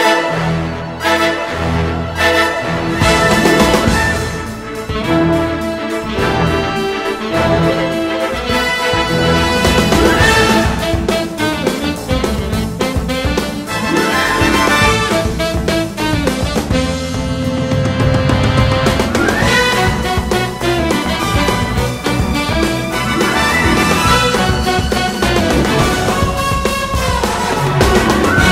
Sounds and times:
Music: 0.0s - 28.5s.

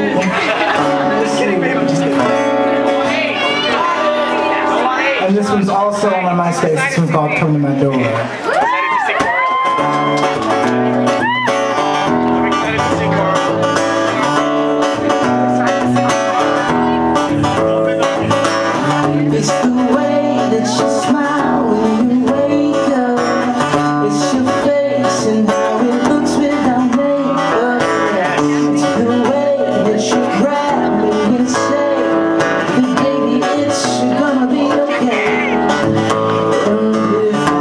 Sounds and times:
Music: 0.0s - 37.6s
Speech: 3.0s - 8.4s, 12.3s - 14.4s.

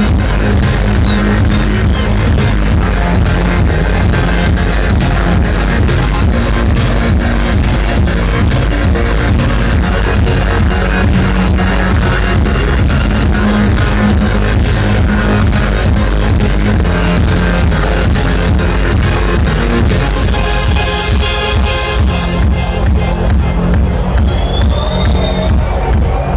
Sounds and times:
Techno: 0.0s - 26.3s.

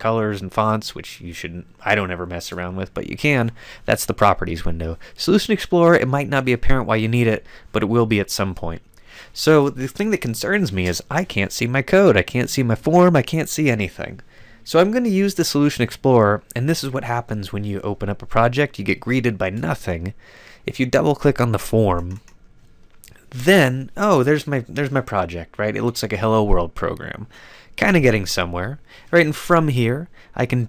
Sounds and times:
Narration, monologue: 0.0s - 30.6s.

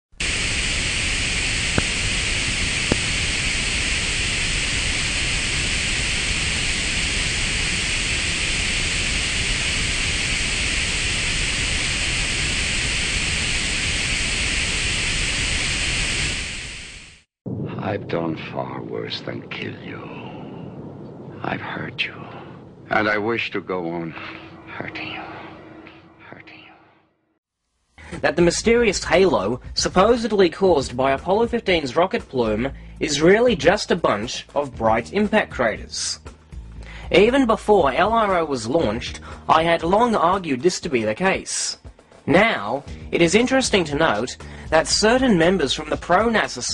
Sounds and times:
White noise: 0.1s - 17.3s.

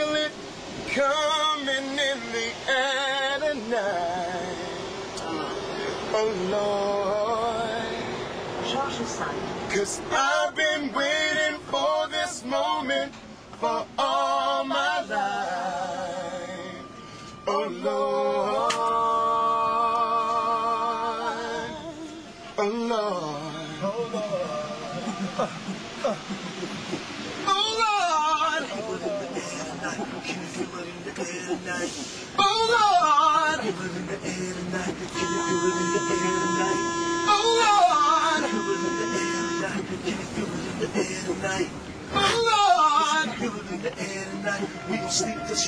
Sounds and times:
Male singing: 0.0s - 9.0s, 9.7s - 26.3s, 27.4s - 45.6s
Train: 0.0s - 14.0s, 16.3s - 45.6s
Rapping: 28.5s - 36.8s, 37.5s - 45.6s.

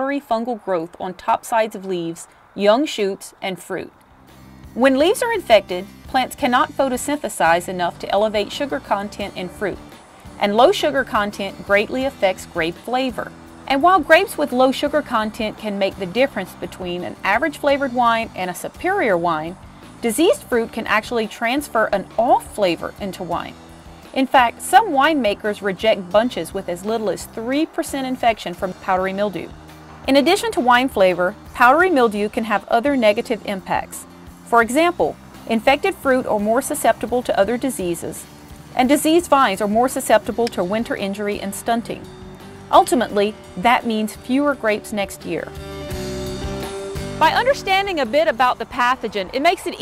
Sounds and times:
Speech: 0.0s - 3.9s, 4.8s - 9.8s, 10.4s - 23.6s, 24.2s - 29.5s, 30.1s - 42.1s, 42.7s - 45.5s, 47.2s - 49.8s
Music: 0.0s - 49.8s.

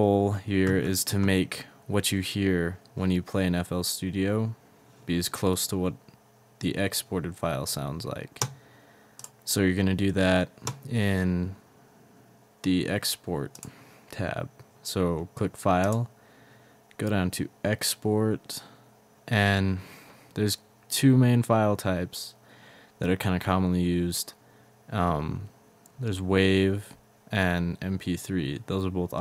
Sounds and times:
Speech: 0.0s - 8.5s, 9.5s - 11.6s, 12.6s - 16.1s, 17.0s - 22.4s, 23.0s - 29.2s.

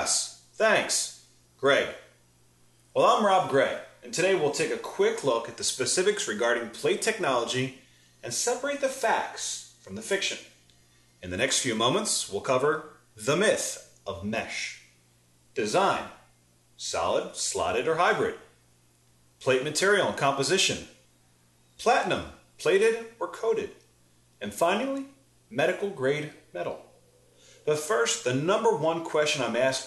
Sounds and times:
Speech: 0.0s - 2.1s, 3.0s - 10.6s, 11.2s - 15.0s, 15.6s - 18.6s, 19.4s - 21.0s, 21.8s - 26.9s, 27.6s - 29.8s.

